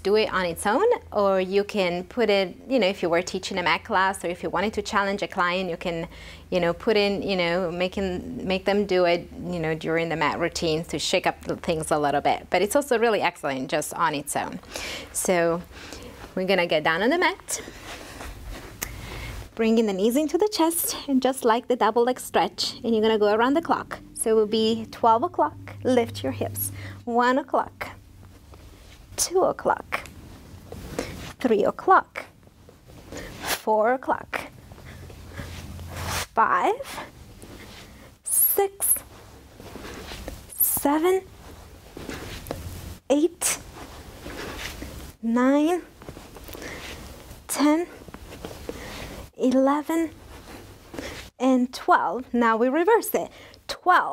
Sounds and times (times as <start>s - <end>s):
Speech: 0.0s - 14.6s, 15.2s - 15.6s, 16.4s - 17.6s, 19.6s - 28.0s, 29.2s - 30.1s, 31.4s - 32.3s, 33.6s - 34.5s, 36.4s - 37.0s, 40.6s - 41.3s, 45.2s - 45.9s, 47.5s - 48.0s, 49.4s - 50.2s, 51.4s - 54.1s.